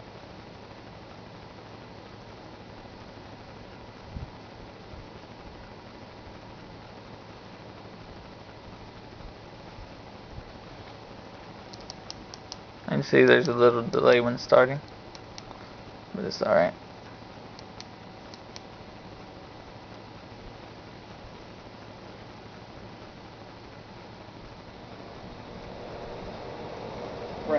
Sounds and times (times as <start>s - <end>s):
Inside, small room: 0.0s - 27.5s
Speech: 12.9s - 14.8s, 16.1s - 16.8s.